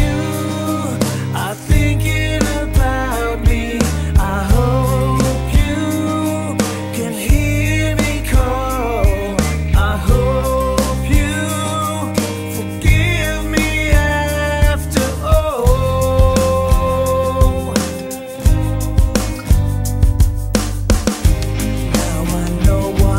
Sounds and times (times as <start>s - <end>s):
Sad music: 0.0s - 23.1s.